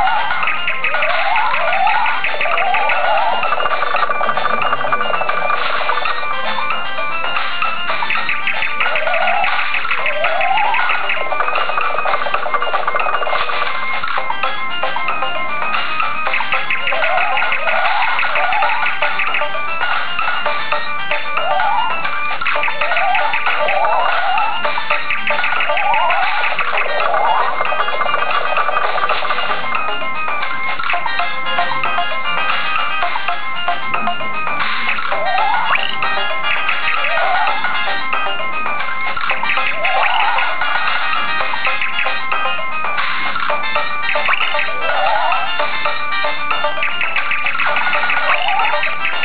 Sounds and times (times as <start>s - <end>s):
Music: 0.0s - 49.2s.